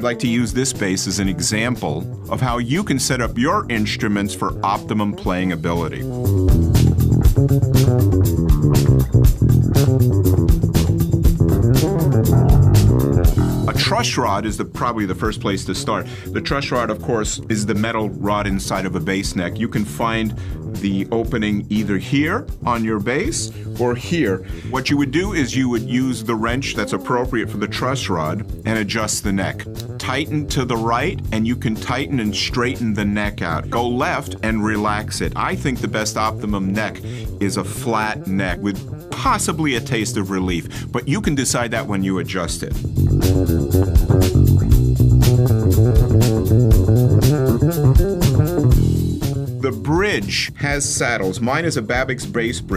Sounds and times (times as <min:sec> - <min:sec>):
Speech: 0:00.0 - 0:06.1, 0:13.7 - 0:42.8, 0:49.6 - 0:52.7.